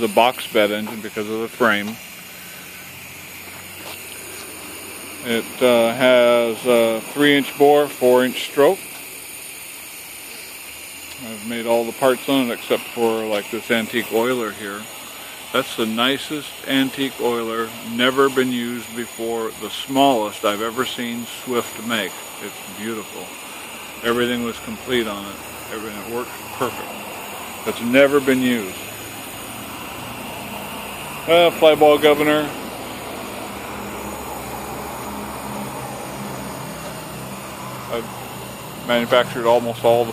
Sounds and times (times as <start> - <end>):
Speech: 0.0 - 2.0, 5.2 - 8.8, 11.2 - 14.9, 15.5 - 23.3, 24.0 - 26.9, 27.7 - 28.8, 31.3 - 32.6, 37.9 - 38.1, 38.9 - 40.1.